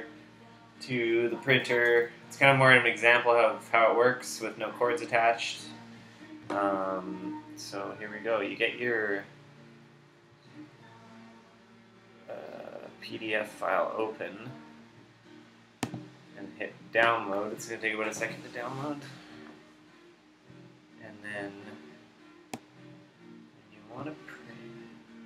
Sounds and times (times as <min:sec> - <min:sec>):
Music: 0:00.0 - 0:25.2
Speech: 0:12.3 - 0:14.6, 0:16.4 - 0:19.2, 0:23.8 - 0:24.5.